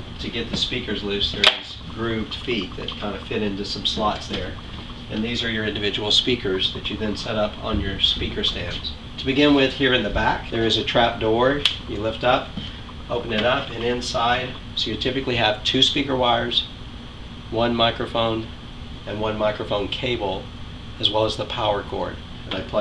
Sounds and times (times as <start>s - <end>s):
Speech: 0.2s - 16.7s, 17.5s - 18.5s, 19.1s - 22.8s.